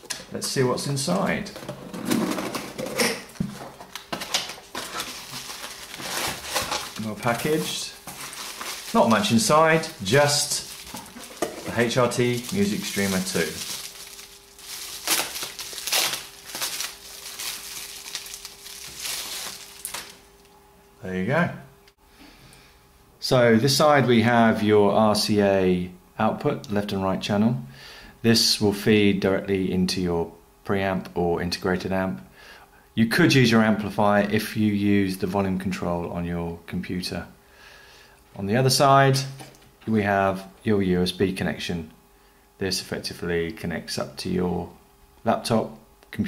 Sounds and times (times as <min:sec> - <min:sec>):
Speech: 0:00.3 - 0:01.6, 0:07.0 - 0:08.0, 0:08.9 - 0:10.7, 0:11.6 - 0:13.6, 0:21.0 - 0:21.7, 0:23.2 - 0:32.3, 0:33.0 - 0:37.4, 0:38.4 - 0:42.0, 0:42.6 - 0:46.2.